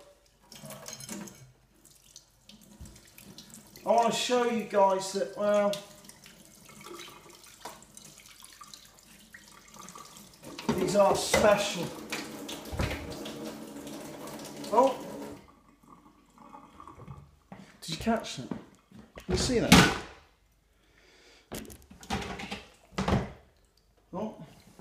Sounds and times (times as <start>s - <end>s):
Water tap, faucet: 0.0s - 17.0s
Sink (filling or washing): 0.0s - 17.3s
Water: 0.0s - 17.6s, 22.8s - 24.8s.